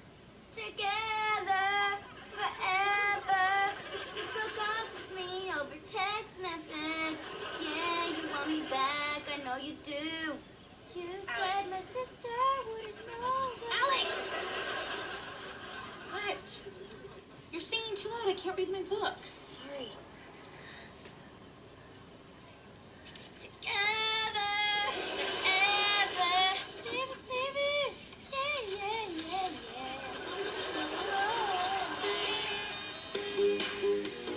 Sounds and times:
Female singing: 0.6 - 14.1, 23.5 - 32.3.

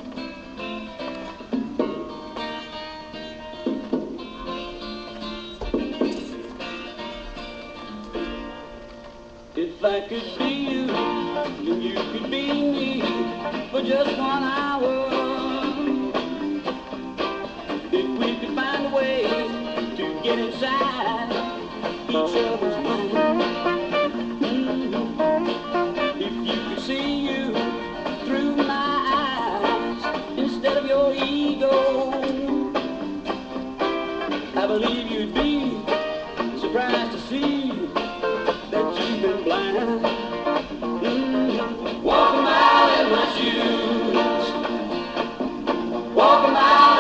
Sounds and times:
Music: 0.0 - 47.0.

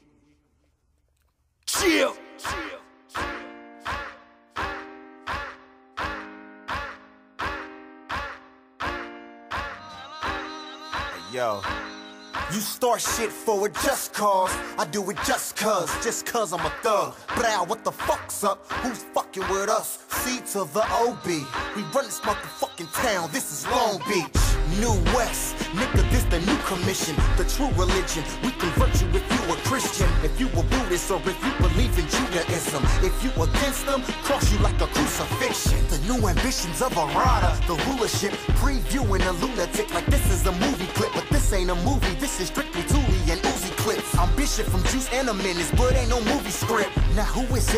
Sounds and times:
Music: 1.7 - 47.7.

